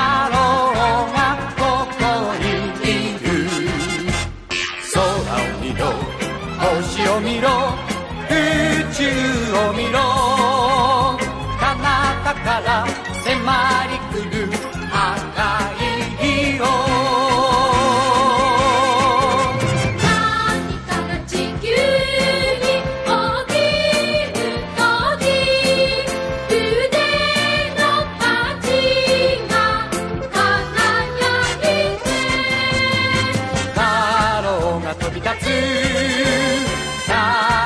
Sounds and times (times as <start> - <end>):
Music: 0.0 - 37.6.